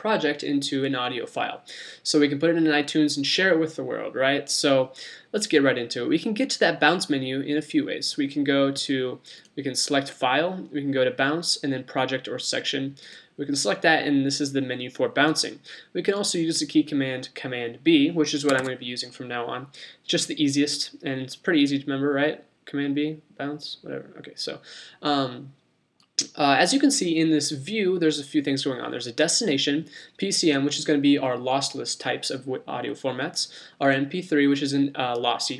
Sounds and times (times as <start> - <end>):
Speech: 0.0 - 25.6, 26.2 - 35.5.